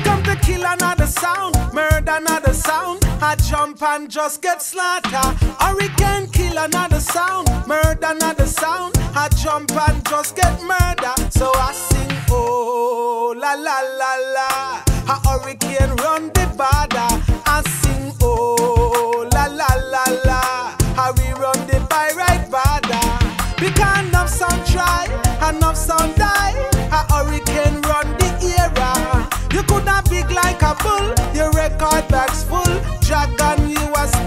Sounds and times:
Music: 0.0s - 34.2s.

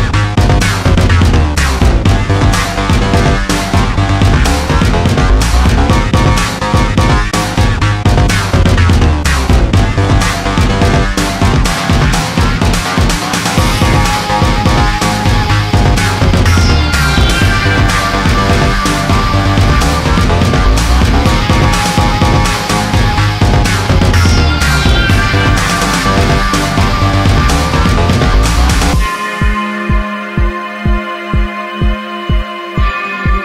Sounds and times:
Dubstep: 0.0s - 33.4s
Electronic dance music: 0.0s - 33.4s
Electronica: 0.0s - 33.4s
Soundtrack music: 0.0s - 33.4s
Techno: 0.0s - 33.4s
Trance music: 0.0s - 33.4s.

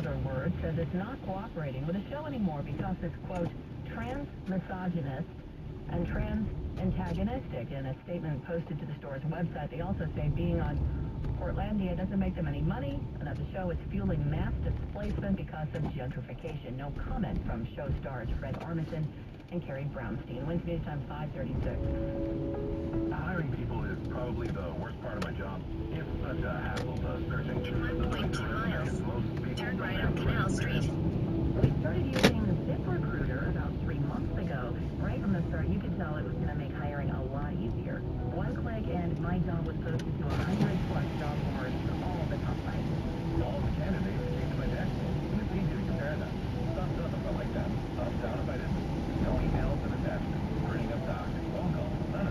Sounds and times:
Speech: 0.0s - 5.3s, 5.9s - 22.0s, 23.1s - 52.3s
Music: 20.0s - 52.3s.

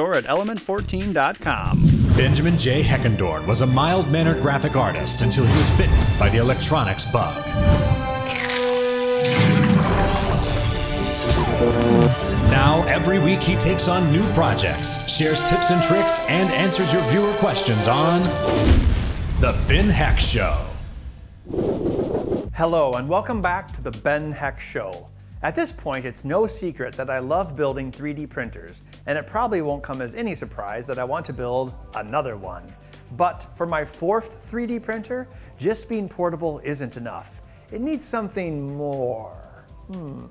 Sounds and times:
Speech: 0.0s - 7.4s, 12.5s - 18.3s, 19.4s - 20.8s, 22.5s - 40.3s
Music: 0.0s - 21.4s, 22.5s - 40.3s.

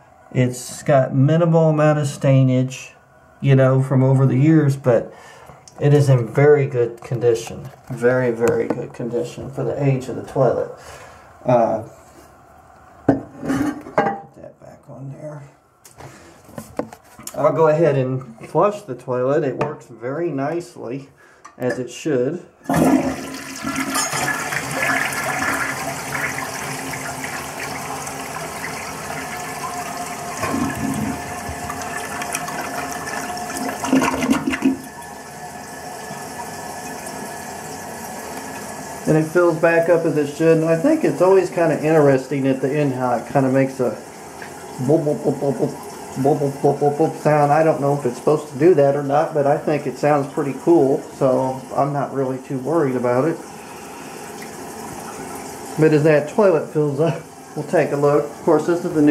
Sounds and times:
Toilet flush: 22.6s - 59.1s.

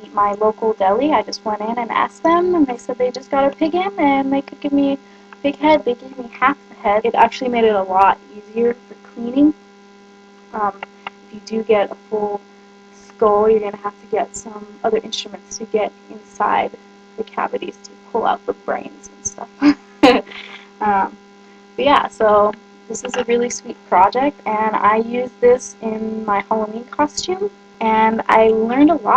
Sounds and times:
Speech: 0.0s - 9.6s, 10.6s - 12.4s, 13.0s - 21.2s, 21.8s - 29.1s.

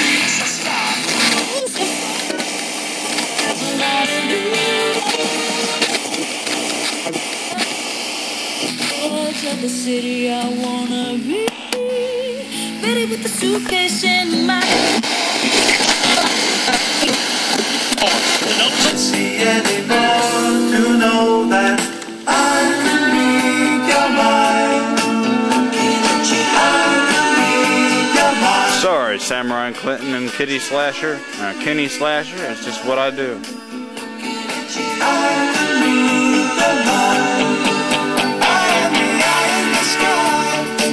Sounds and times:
Radio: 0.0s - 22.9s, 28.2s - 33.5s.

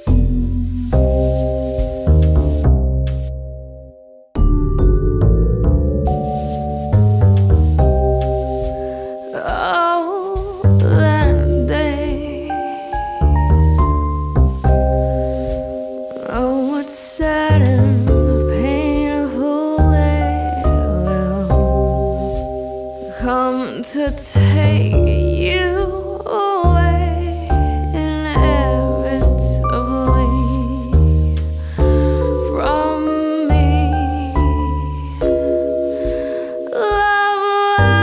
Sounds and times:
Music: 0.0s - 38.0s.

